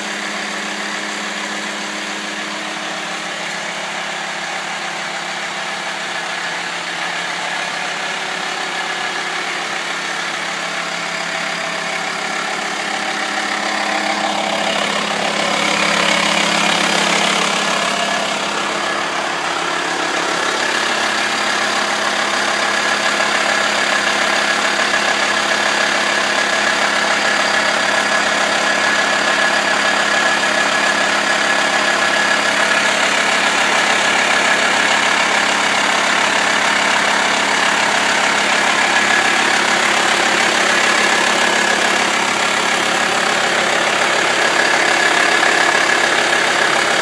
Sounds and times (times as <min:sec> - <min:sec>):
Car: 0:00.0 - 0:47.0
Idling: 0:00.0 - 0:47.0.